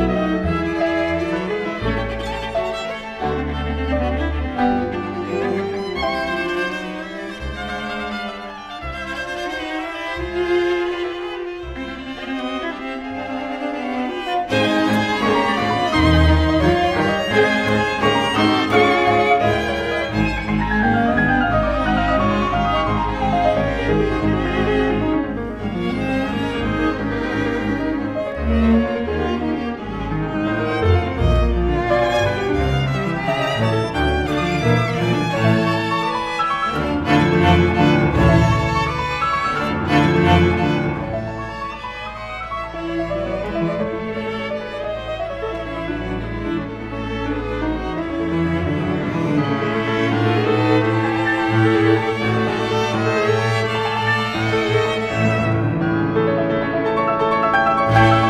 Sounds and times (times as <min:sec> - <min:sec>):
Cello: 0:00.0 - 0:58.2
Orchestra: 0:00.0 - 0:58.2.